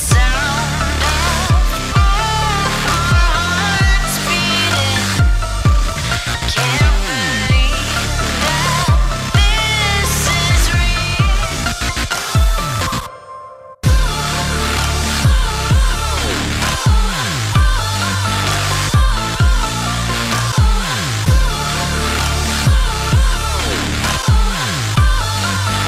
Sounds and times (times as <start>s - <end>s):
Music: 0.0s - 25.8s.